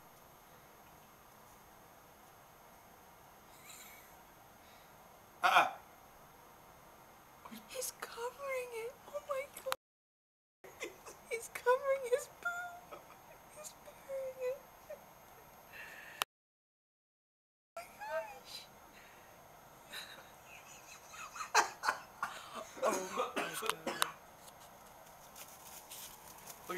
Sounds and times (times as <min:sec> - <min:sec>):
Speech: 0:07.5 - 0:09.8, 0:11.3 - 0:12.8, 0:13.6 - 0:14.6, 0:17.8 - 0:18.7.